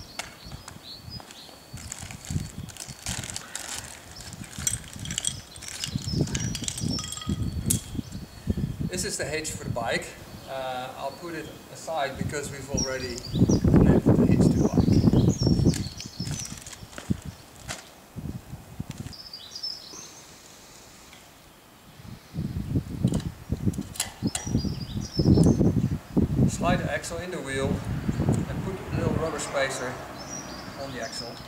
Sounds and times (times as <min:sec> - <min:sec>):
Environmental noise: 0:00.0 - 0:31.4
Speech: 0:08.9 - 0:13.2, 0:26.5 - 0:27.8, 0:28.5 - 0:30.0, 0:30.8 - 0:31.4.